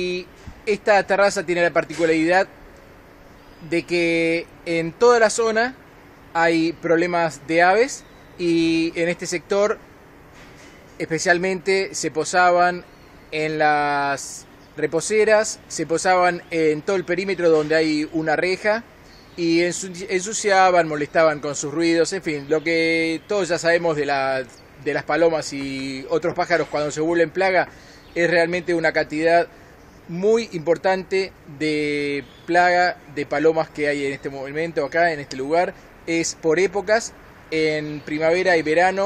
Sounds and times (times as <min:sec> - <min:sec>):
Speech: 0:00.0 - 0:02.5, 0:03.6 - 0:05.8, 0:06.4 - 0:09.8, 0:11.0 - 0:29.5, 0:30.1 - 0:39.0
Outside, urban or manmade: 0:00.0 - 0:39.0.